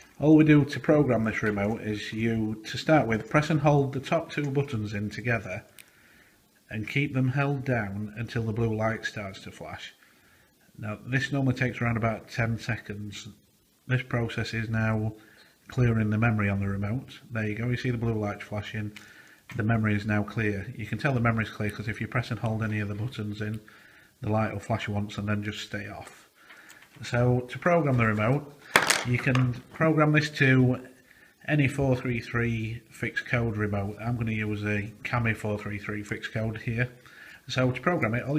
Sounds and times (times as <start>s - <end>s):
Speech: 0.2s - 5.7s, 6.7s - 10.0s, 10.8s - 26.3s, 27.0s - 38.3s.